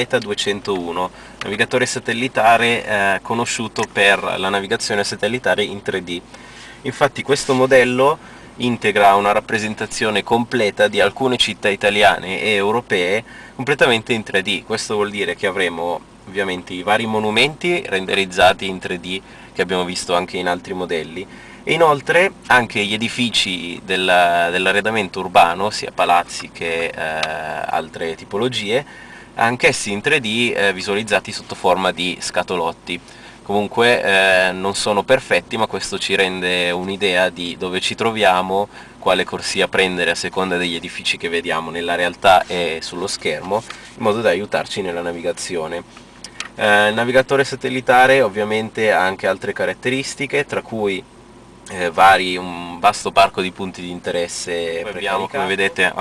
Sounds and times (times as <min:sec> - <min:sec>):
Speech: 0:00.0 - 0:06.2, 0:06.8 - 0:45.9, 0:46.5 - 0:51.1, 0:51.7 - 0:56.0.